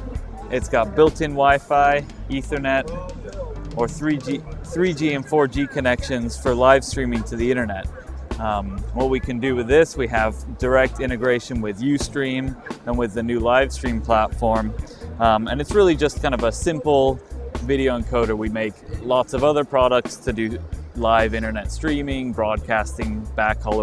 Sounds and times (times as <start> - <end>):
Music: 0.0 - 23.8
Speech: 0.5 - 23.8.